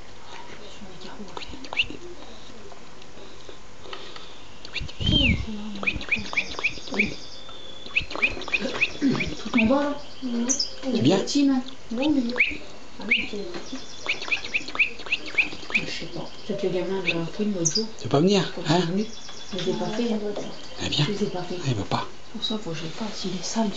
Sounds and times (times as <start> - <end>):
Chirp, tweet: 4.7 - 10.8, 12.4 - 17.9, 19.0 - 21.0.